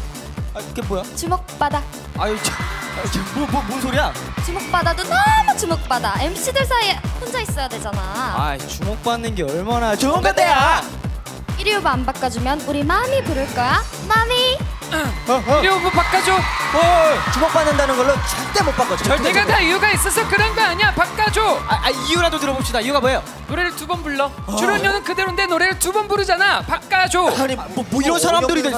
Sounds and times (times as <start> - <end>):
Music: 0.0 - 28.7.